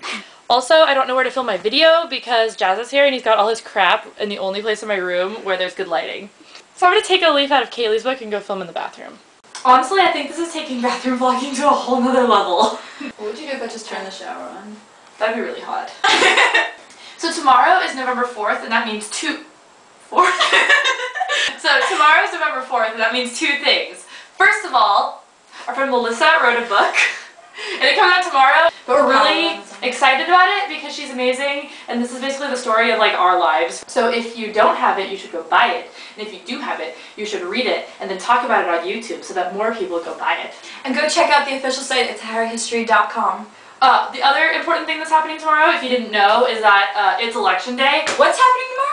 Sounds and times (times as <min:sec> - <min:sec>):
Speech: 0:00.0 - 0:16.0, 0:17.2 - 0:19.5, 0:20.1 - 0:20.6, 0:21.5 - 0:48.9.